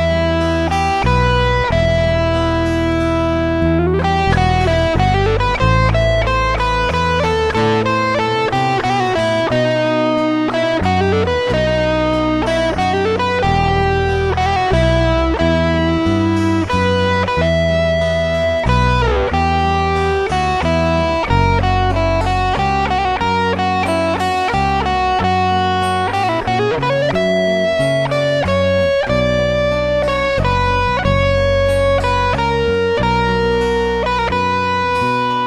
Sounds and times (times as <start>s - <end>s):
Acoustic guitar: 0.0s - 35.4s.